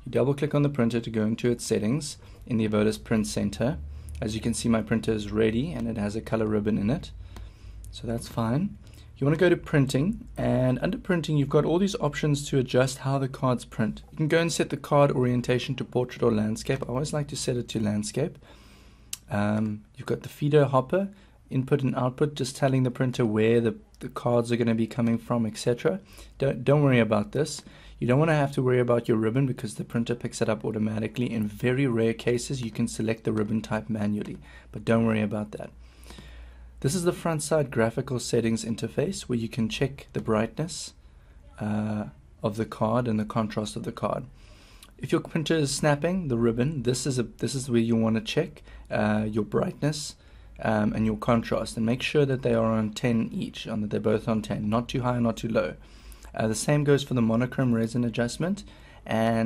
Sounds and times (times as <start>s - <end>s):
Speech: 0.0s - 7.2s, 7.9s - 18.4s, 19.2s - 35.8s, 36.8s - 44.3s, 45.0s - 59.4s.